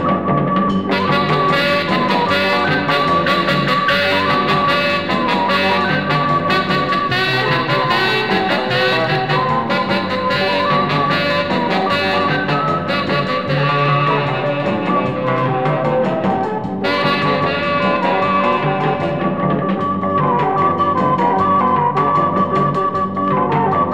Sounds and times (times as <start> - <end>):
Music: 0.0 - 23.9.